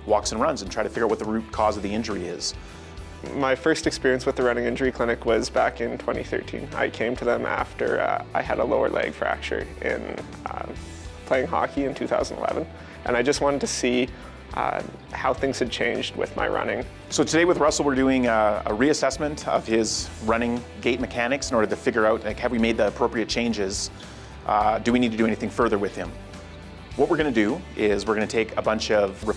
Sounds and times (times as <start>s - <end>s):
Speech: 0.0s - 2.6s, 3.2s - 26.2s, 27.0s - 29.3s
Inside, small room: 0.0s - 29.3s
Music: 0.0s - 29.3s.